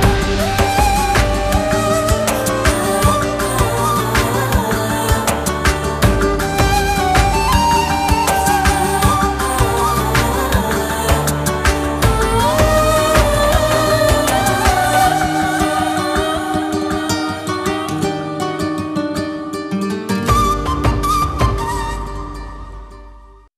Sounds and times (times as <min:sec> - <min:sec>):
Music: 0:00.0 - 0:23.5.